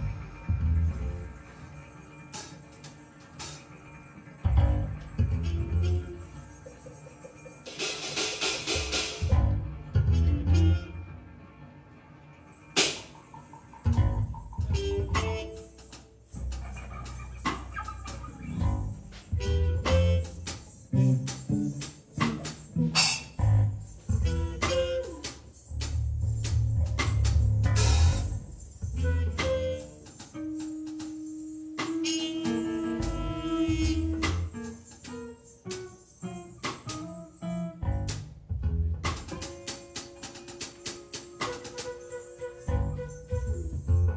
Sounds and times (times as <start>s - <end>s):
Percussion: 0.0s - 11.0s, 12.4s - 44.1s
Trumpet: 0.0s - 38.2s, 39.0s - 44.1s
Flute: 12.8s - 22.4s, 24.0s - 27.2s, 27.8s - 36.0s, 39.8s - 44.1s.